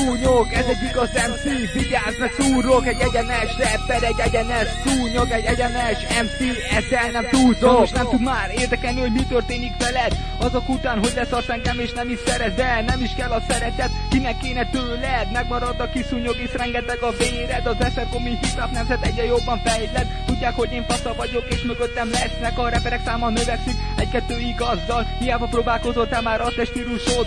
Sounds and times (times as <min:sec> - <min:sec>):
Hip hop music: 0:00.0 - 0:27.2.